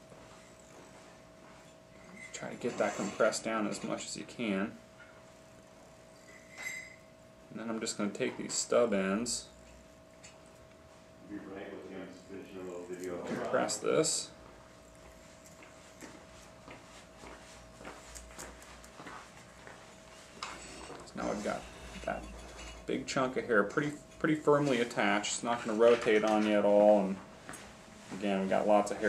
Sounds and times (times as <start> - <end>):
Speech: 2.3 - 4.8, 7.6 - 9.5, 11.3 - 14.4, 21.1 - 22.3, 22.9 - 27.2, 28.2 - 29.0.